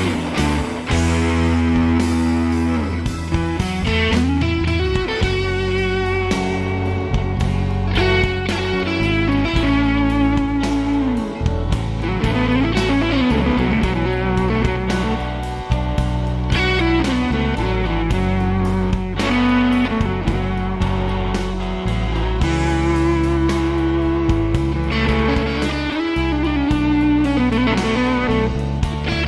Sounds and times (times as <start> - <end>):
Music: 0.0 - 29.2.